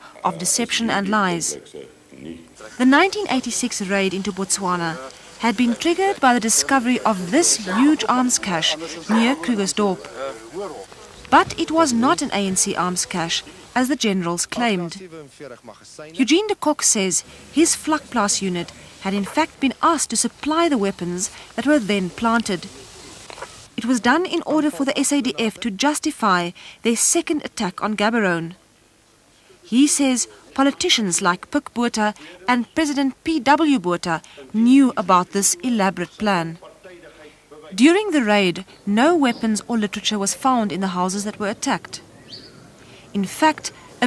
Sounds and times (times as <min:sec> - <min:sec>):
Speech: 0:00.0 - 0:28.6, 0:29.6 - 0:42.0, 0:43.1 - 0:44.0.